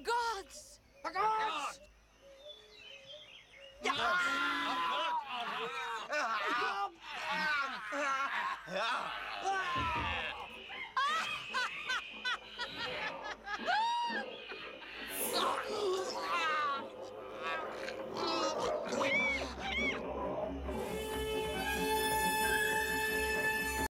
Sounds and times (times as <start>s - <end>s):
Music: 9.8s - 23.9s.